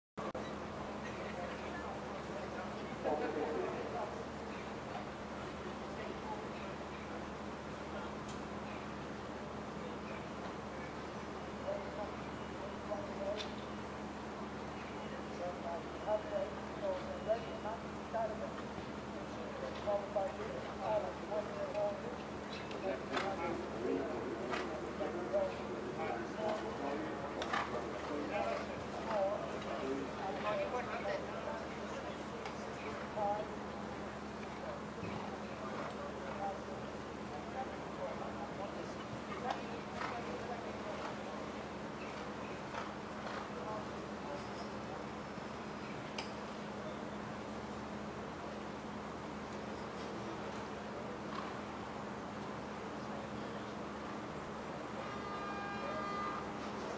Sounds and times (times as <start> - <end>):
Speech: 0.2 - 9.0, 9.7 - 13.7, 14.6 - 45.5, 52.6 - 54.4, 55.7 - 56.9
Clip-clop: 18.2 - 31.3, 34.4 - 36.7, 38.6 - 44.8, 49.5 - 51.8.